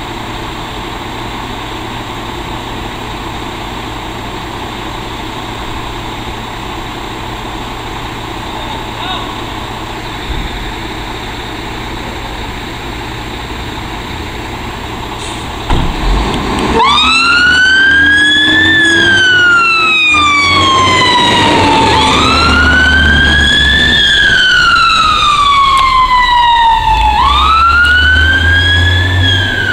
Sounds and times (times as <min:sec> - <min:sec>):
Fire engine, fire truck (siren): 0:00.0 - 0:29.7
Truck: 0:00.0 - 0:29.7.